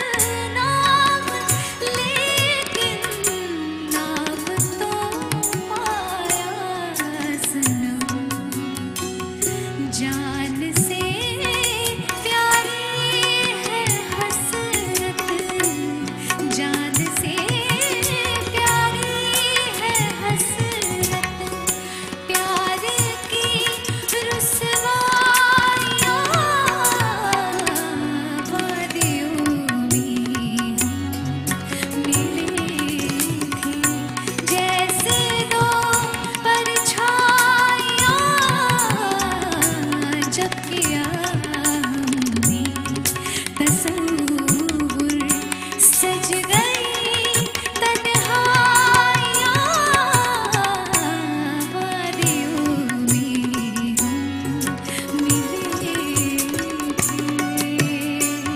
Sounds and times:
Music of Bollywood: 0.0s - 58.5s.

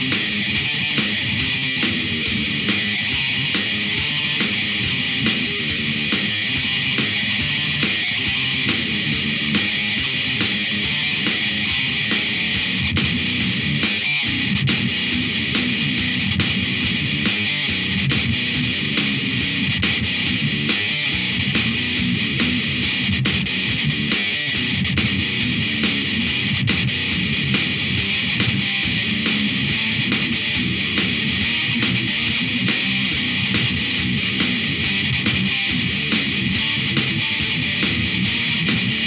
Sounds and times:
Music: 0.0s - 39.0s.

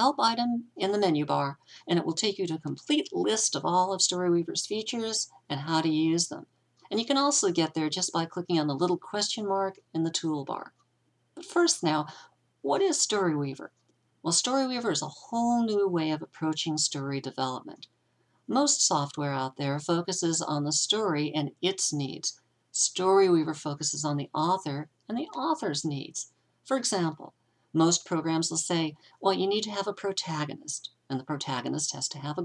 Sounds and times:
Speech: 0.0s - 10.8s, 11.4s - 17.9s, 18.5s - 32.4s.

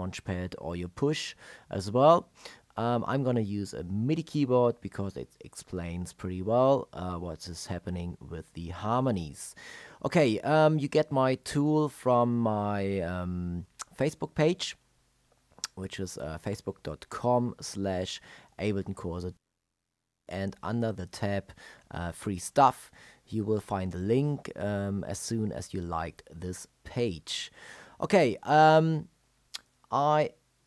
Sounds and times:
Speech: 0.0s - 14.8s, 15.6s - 19.4s, 20.3s - 30.4s.

